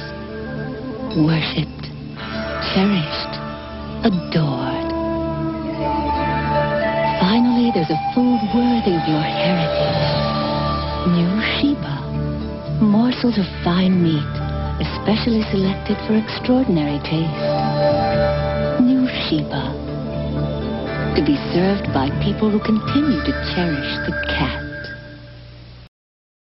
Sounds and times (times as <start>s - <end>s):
Music: 0.0s - 25.9s
Speech: 1.2s - 1.9s, 2.6s - 3.4s, 4.0s - 4.9s, 7.2s - 9.9s, 11.1s - 12.1s, 12.8s - 17.4s, 18.8s - 19.8s, 21.2s - 24.8s.